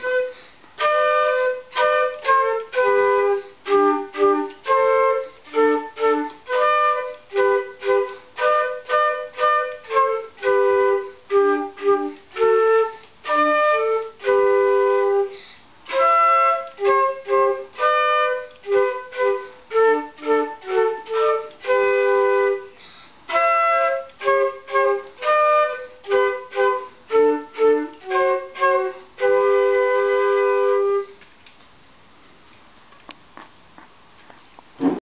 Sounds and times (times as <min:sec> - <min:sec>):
Music: 0:00.0 - 0:31.2.